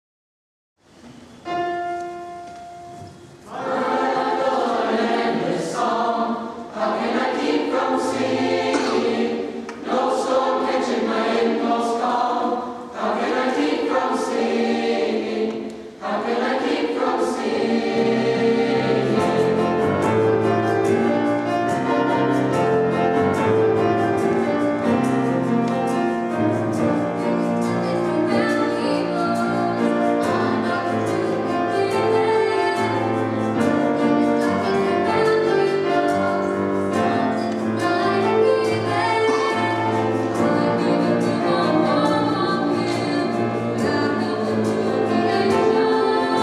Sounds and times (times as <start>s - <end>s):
Music: 0.8s - 46.4s
Female singing: 27.6s - 33.0s, 37.8s - 46.4s.